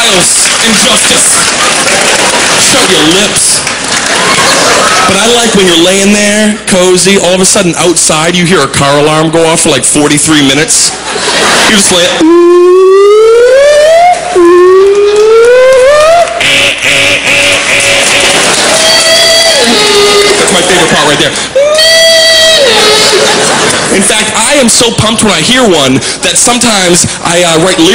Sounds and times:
Speech: 0.0s - 1.5s, 2.6s - 3.7s, 5.1s - 11.0s, 11.7s - 12.3s, 19.5s - 21.4s, 23.9s - 27.9s.

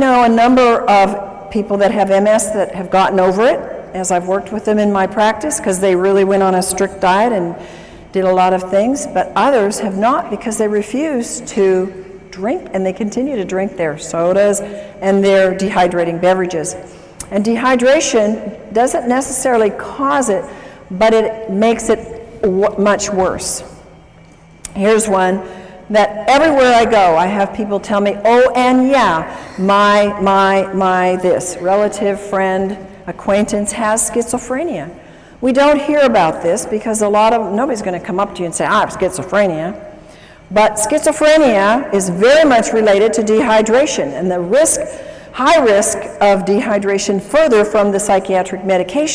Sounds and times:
Speech: 8.2s - 23.6s, 24.7s - 39.8s, 40.6s - 49.1s.

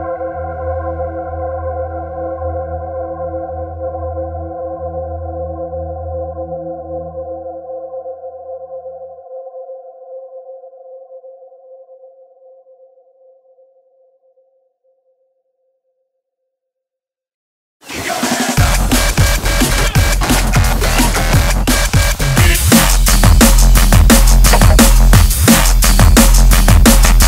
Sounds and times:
Music: 0.0s - 16.8s, 17.8s - 27.2s.

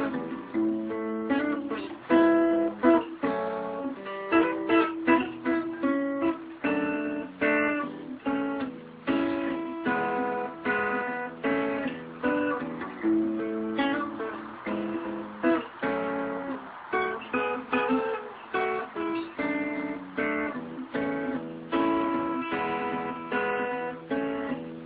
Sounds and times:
Strum: 0.0s - 24.8s.

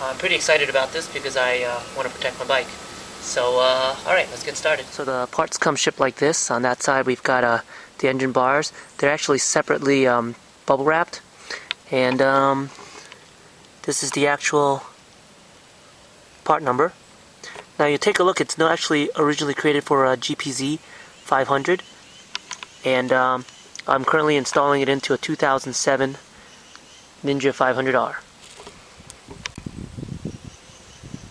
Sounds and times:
Speech: 0.0s - 11.2s, 11.9s - 12.7s, 13.8s - 14.9s, 16.4s - 17.0s, 17.8s - 21.8s, 22.8s - 26.2s, 27.2s - 28.2s.

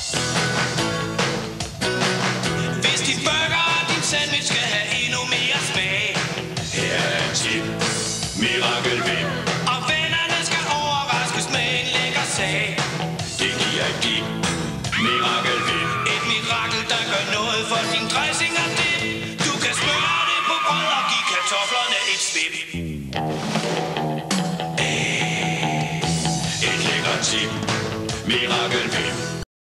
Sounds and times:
Music: 0.0s - 29.4s.

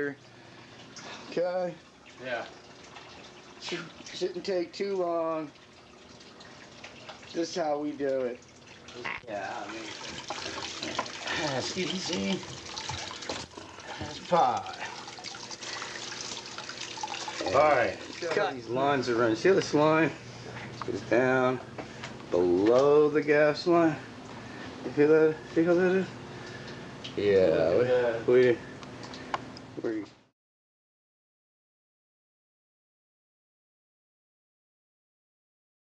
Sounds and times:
Speech: 3.6s - 5.5s, 7.3s - 8.4s, 11.4s - 12.4s, 14.0s - 14.8s, 17.5s - 20.2s, 22.3s - 24.0s, 24.9s - 26.1s, 27.2s - 28.6s, 29.8s - 30.1s.

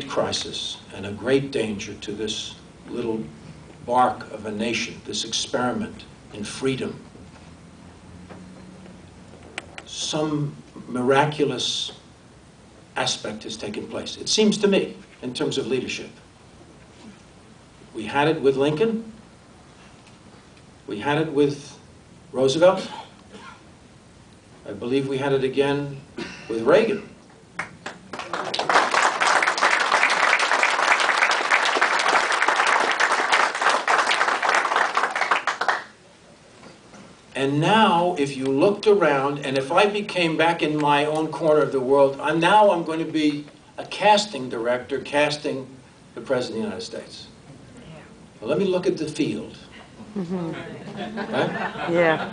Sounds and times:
Male speech, man speaking: 0.0s - 3.3s, 3.9s - 7.0s, 9.9s - 12.0s, 13.0s - 16.2s, 18.0s - 19.1s, 20.9s - 21.8s, 22.4s - 22.9s, 24.7s - 27.1s, 37.4s - 47.4s, 48.4s - 49.7s
Narration, monologue: 0.0s - 27.3s, 37.2s - 52.3s.

